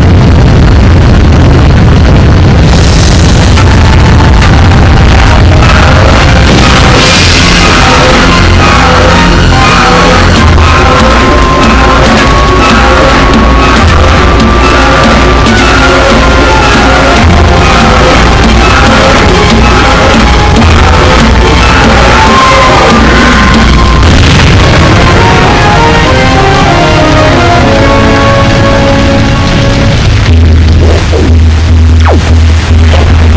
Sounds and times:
Music: 0.0s - 33.3s.

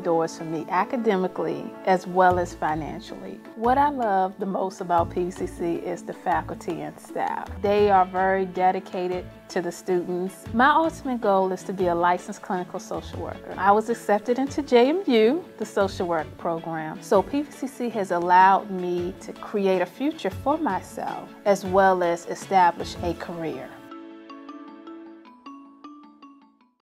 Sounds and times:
Speech: 0.0s - 23.8s
Music: 0.0s - 26.8s.

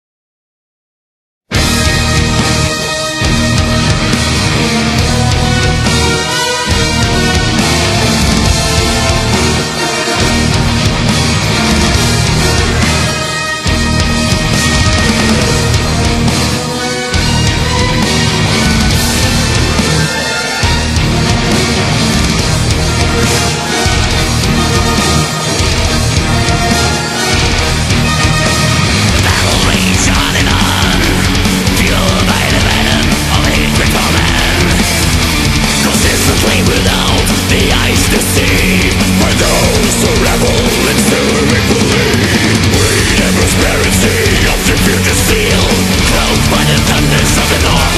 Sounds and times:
Music: 1.5s - 47.9s.

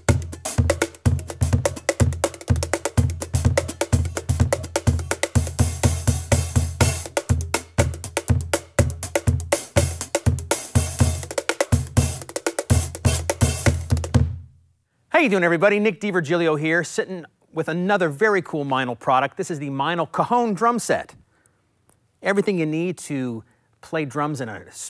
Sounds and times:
Bass drum: 0.0s - 14.5s
Drum kit: 0.0s - 14.5s.

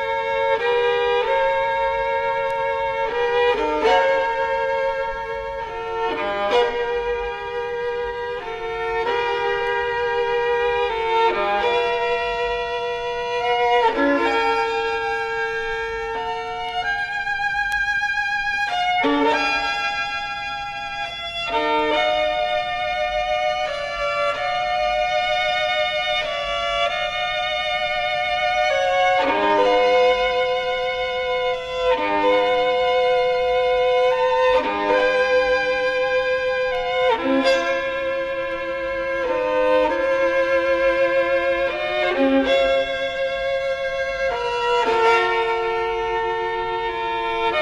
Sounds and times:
Violin, fiddle: 0.0s - 47.6s.

